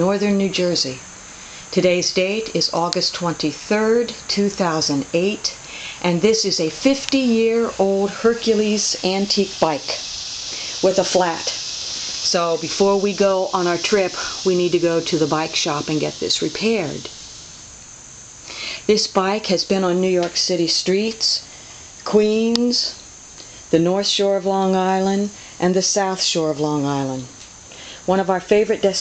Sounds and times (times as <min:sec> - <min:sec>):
Speech: 0:00.0 - 0:01.0, 0:01.7 - 0:11.6, 0:12.2 - 0:17.1, 0:18.8 - 0:23.0, 0:23.7 - 0:27.4, 0:28.1 - 0:29.0.